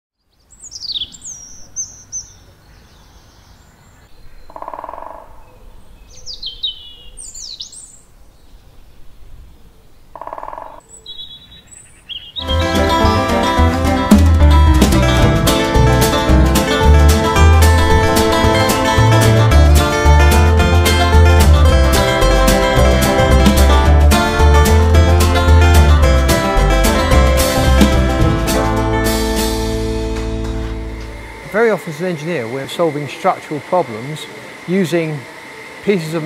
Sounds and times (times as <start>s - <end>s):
Bird vocalization, bird call, bird song: 0.2s - 12.6s.